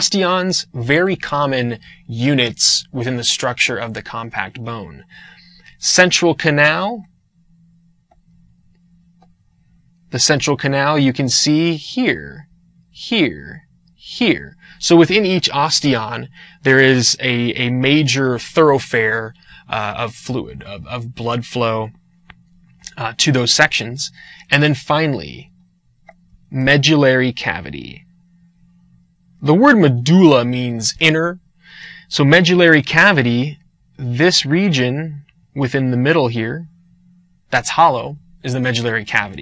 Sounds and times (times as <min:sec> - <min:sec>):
Speech: 0:00.0 - 0:07.1, 0:10.1 - 0:22.0, 0:22.9 - 0:25.5, 0:26.5 - 0:28.0, 0:29.4 - 0:36.7, 0:37.5 - 0:39.4
Inside, small room: 0:00.0 - 0:39.4.